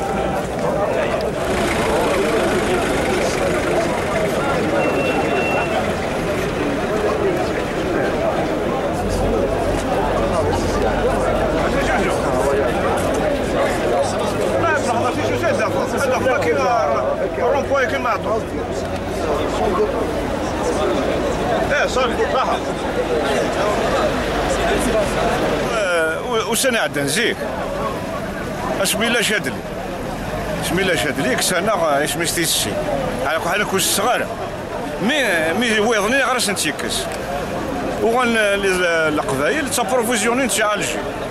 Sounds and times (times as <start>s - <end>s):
Speech: 0.0s - 41.3s.